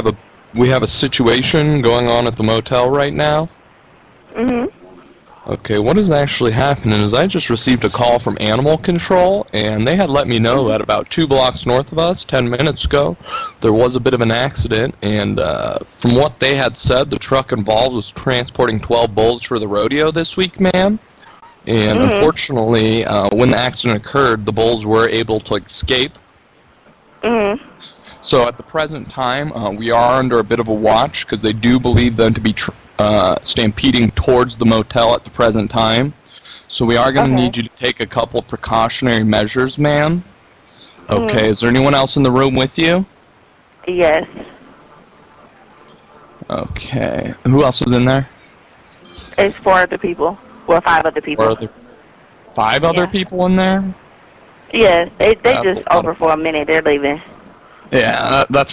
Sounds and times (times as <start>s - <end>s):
Speech: 0.0s - 3.5s, 4.4s - 21.0s, 21.7s - 26.2s, 27.3s - 43.1s, 43.9s - 44.5s, 46.4s - 48.3s, 49.1s - 51.8s, 52.6s - 54.0s, 54.7s - 57.3s, 57.9s - 58.7s.